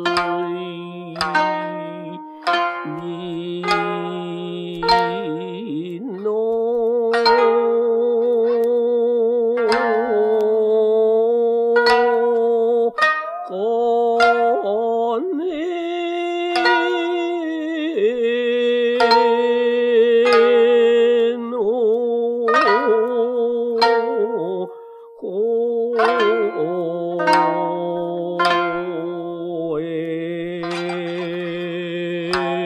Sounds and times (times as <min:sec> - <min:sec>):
Music: 0:00.0 - 0:32.6.